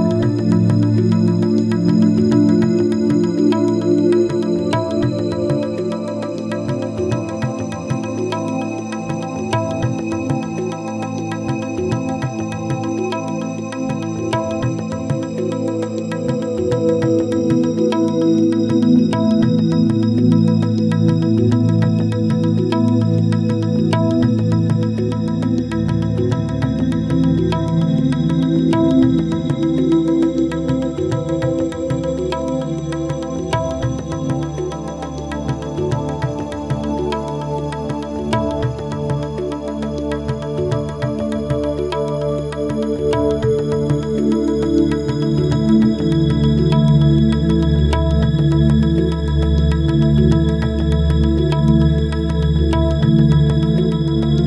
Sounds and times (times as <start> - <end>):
Music: 0.0 - 54.4.